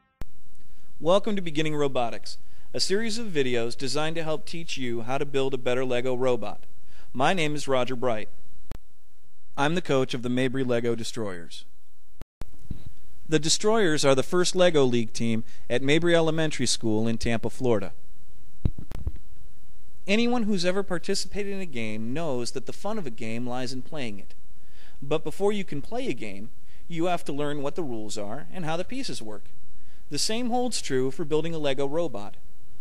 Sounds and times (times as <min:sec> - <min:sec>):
Speech: 0:01.0 - 0:08.3, 0:09.6 - 0:11.7, 0:13.3 - 0:18.0, 0:20.1 - 0:24.4, 0:25.0 - 0:29.5, 0:30.1 - 0:32.4.